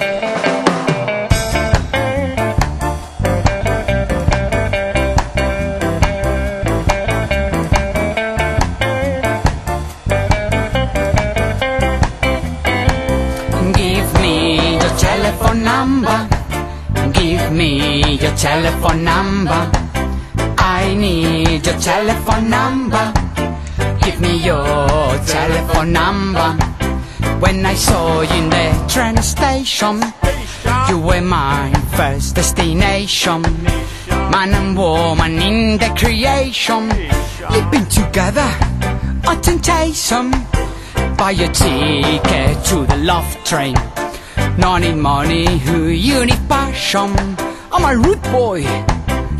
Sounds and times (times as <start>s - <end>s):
Ska: 0.0s - 49.3s
Soul music: 0.0s - 49.3s.